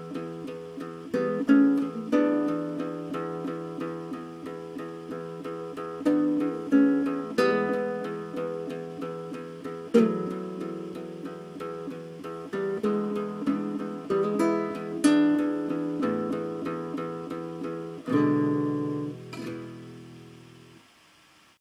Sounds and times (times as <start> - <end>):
Strum: 0.0 - 20.9.